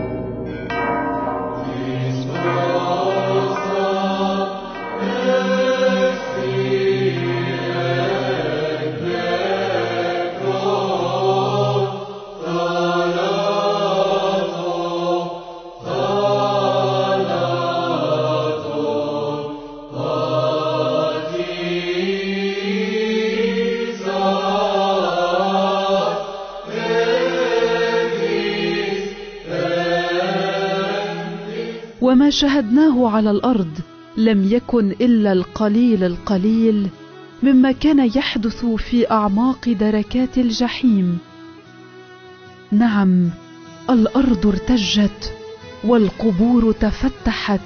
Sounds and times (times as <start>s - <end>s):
Chant: 1.6s - 37.7s.